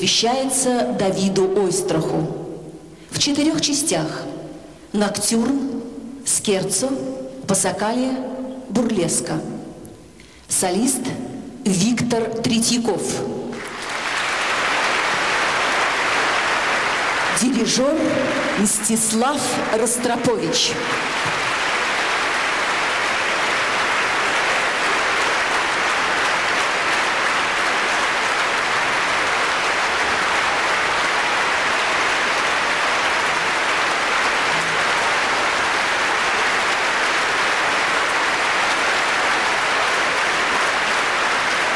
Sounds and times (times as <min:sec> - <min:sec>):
Speech: 0:00.0 - 0:02.4, 0:03.1 - 0:04.4, 0:05.0 - 0:09.7, 0:10.5 - 0:13.6, 0:17.3 - 0:20.9.